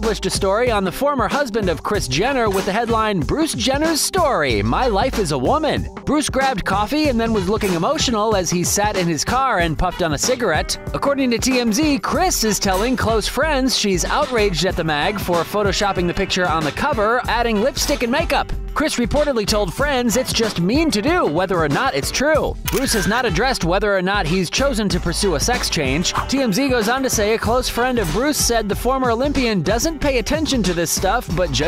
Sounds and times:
Music: 0.0 - 31.6
Speech: 0.0 - 31.6.

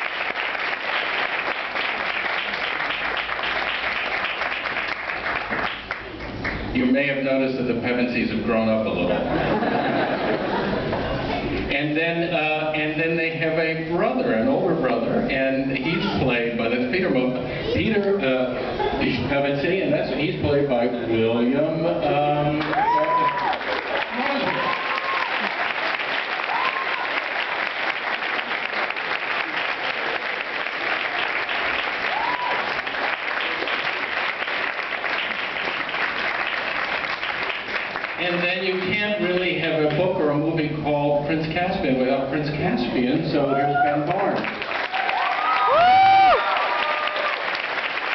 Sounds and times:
Male speech, man speaking: 6.8 - 9.3, 11.7 - 23.3, 38.2 - 44.4.

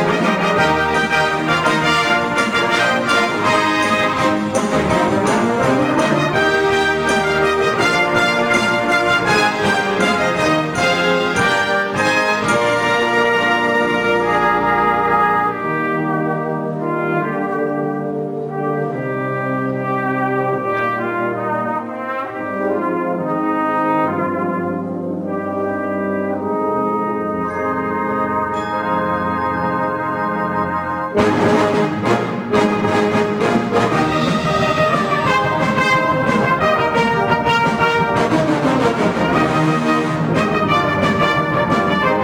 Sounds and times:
Inside, large room or hall: 0.0 - 42.2
Orchestra: 0.0 - 42.2.

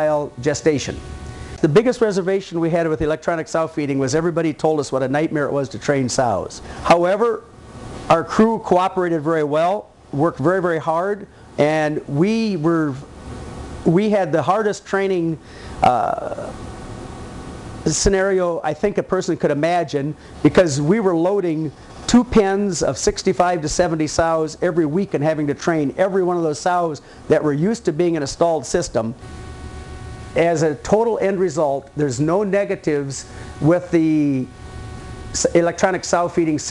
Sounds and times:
Speech: 0.0 - 1.0, 1.6 - 7.5, 8.1 - 13.1, 13.8 - 16.6, 17.8 - 29.2, 30.4 - 34.5, 35.4 - 36.7.

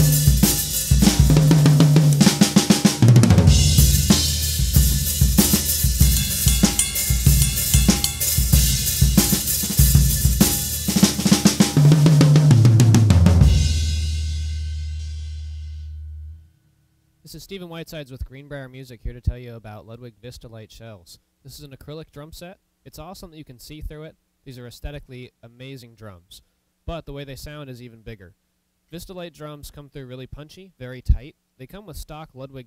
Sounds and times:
Hi-hat: 0.0 - 2.6, 3.5 - 11.7
Snare drum: 0.0 - 15.2
Bass drum: 0.0 - 16.4
Drum kit: 0.0 - 16.4
Speech: 17.3 - 32.6.

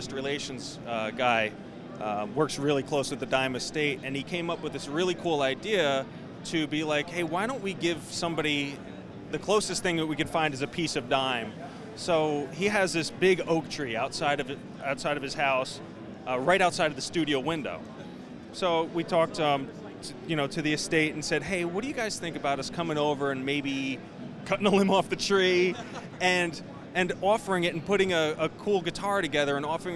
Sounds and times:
Speech: 0.0 - 29.9.

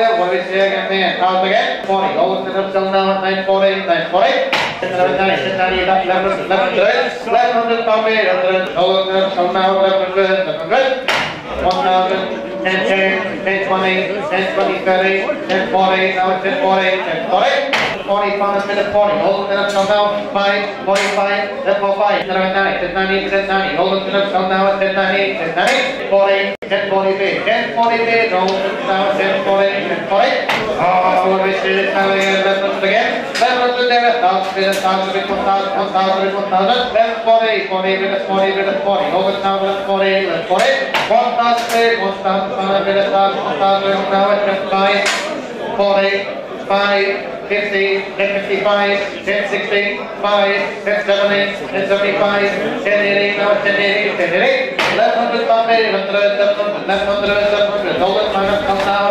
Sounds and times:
Speech: 0.0 - 59.1.

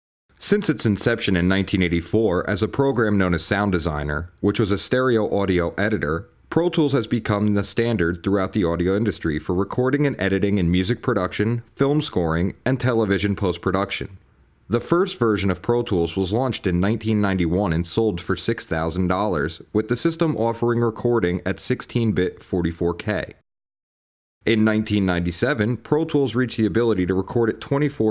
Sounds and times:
Speech: 0.4 - 23.4, 24.5 - 28.1.

